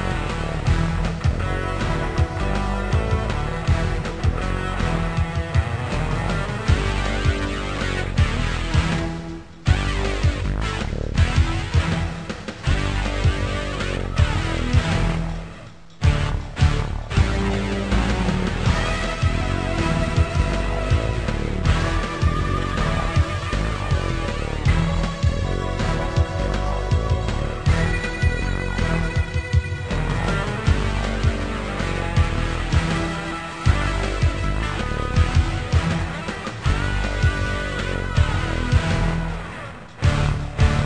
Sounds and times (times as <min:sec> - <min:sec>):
Video game music: 0:00.0 - 0:40.8.